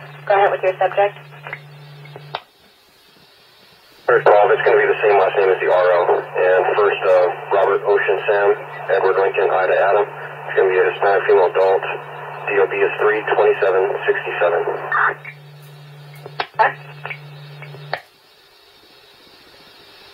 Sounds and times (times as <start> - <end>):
Speech: 0.3 - 1.2, 4.1 - 15.2.